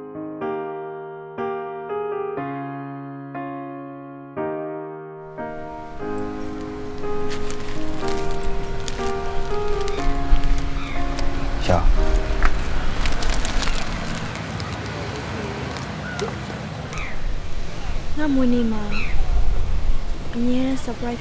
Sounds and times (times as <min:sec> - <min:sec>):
Music: 0:00.0 - 0:14.2
Speech: 0:20.4 - 0:21.2.